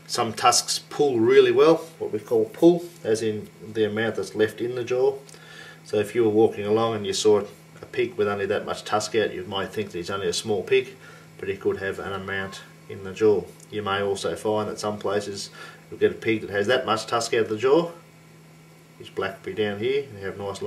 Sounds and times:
Speech: 0.1s - 5.3s, 5.9s - 18.0s, 19.0s - 20.6s.

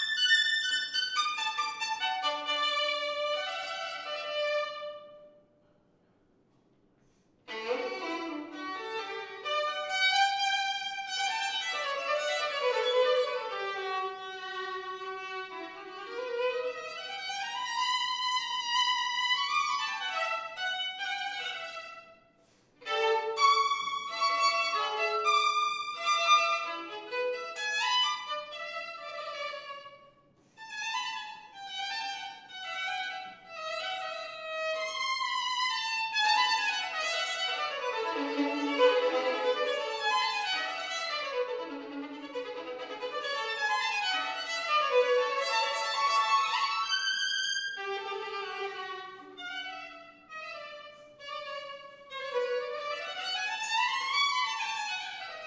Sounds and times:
Violin, fiddle: 0.0s - 5.3s, 7.4s - 22.2s, 22.8s - 55.4s.

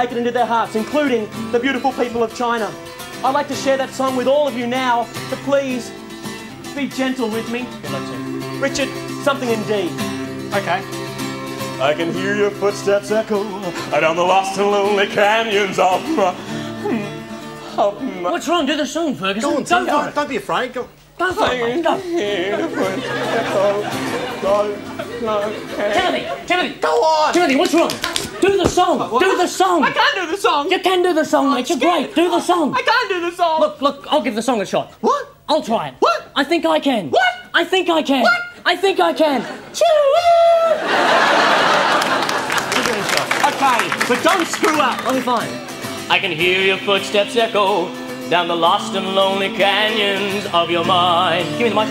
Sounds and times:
Speech: 0.0s - 5.9s, 6.8s - 9.9s, 17.8s - 22.8s, 25.2s - 40.8s, 42.8s - 46.4s
Music: 0.0s - 34.8s, 41.7s - 51.9s.

